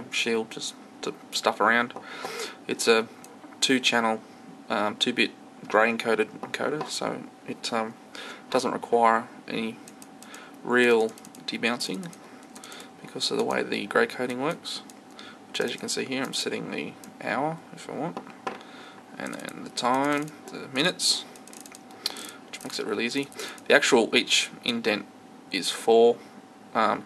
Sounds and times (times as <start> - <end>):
Speech: 0.0 - 2.0, 2.6 - 9.8, 10.6 - 12.2, 13.0 - 14.9, 15.6 - 18.2, 19.2 - 21.3, 22.6 - 26.2, 26.8 - 27.0.